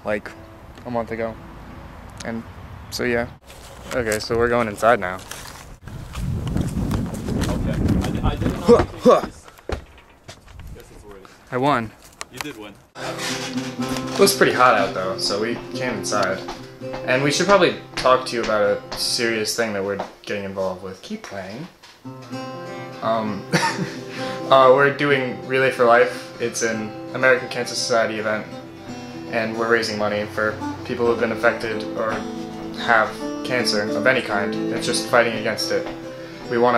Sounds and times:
Speech: 0.0s - 1.4s, 3.0s - 5.2s, 7.4s - 9.4s, 10.8s - 13.2s, 14.2s - 16.4s, 17.1s - 21.7s, 23.0s - 23.4s, 24.5s - 28.5s, 29.3s - 32.2s, 32.8s - 35.9s, 36.5s - 36.7s
Music: 13.0s - 20.8s, 22.0s - 36.7s.

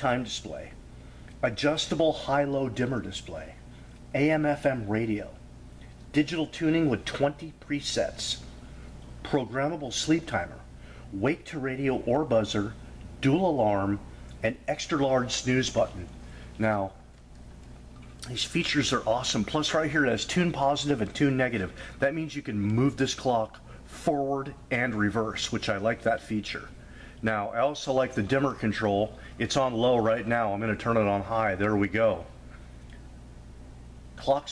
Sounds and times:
Speech: 0.0s - 0.8s, 1.4s - 5.4s, 6.1s - 8.5s, 9.2s - 17.0s, 18.2s - 32.4s, 34.2s - 34.5s.

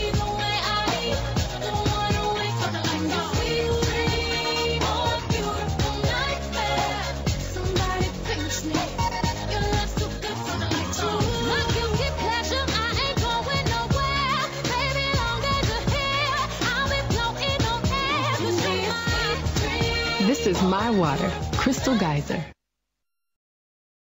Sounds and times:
Music: 0.0s - 22.6s
Speech: 20.2s - 22.6s.

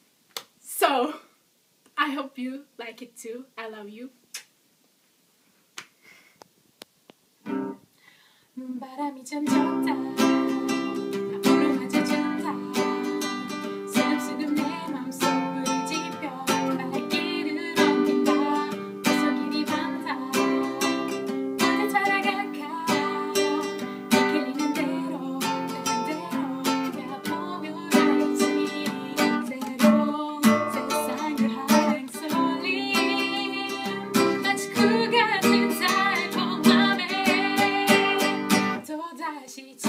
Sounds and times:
Music: 9.5s - 38.8s.

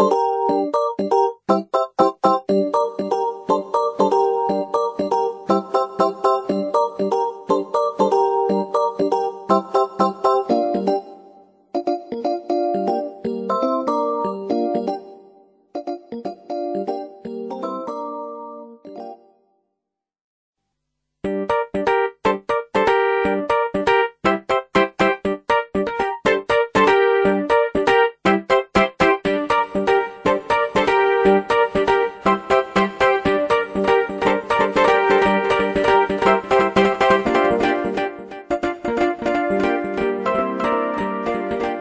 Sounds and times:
Electric piano: 0.0s - 11.2s, 11.8s - 15.2s, 15.8s - 19.2s, 21.3s - 41.8s.

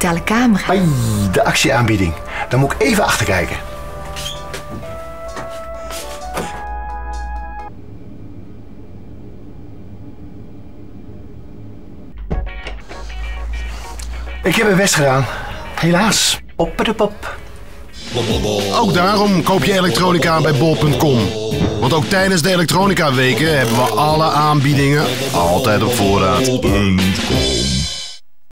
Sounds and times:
Speech: 0.0s - 3.6s, 14.4s - 17.3s, 18.2s - 27.5s
Music: 0.0s - 7.7s, 12.2s - 28.2s.

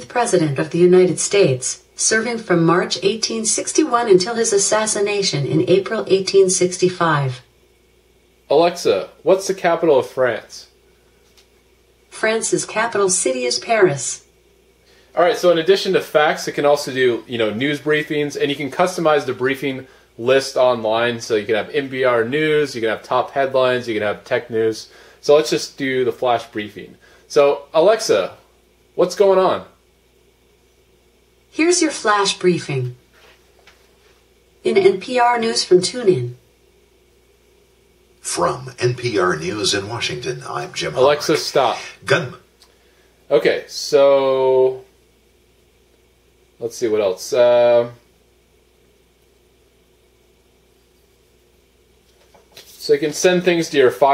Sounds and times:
Speech: 0.0s - 7.5s, 8.5s - 10.7s, 12.2s - 14.2s, 15.2s - 28.4s, 29.0s - 29.8s, 31.6s - 33.0s, 34.6s - 36.4s, 38.2s - 42.5s, 43.3s - 44.9s, 46.6s - 48.0s, 52.7s - 54.1s.

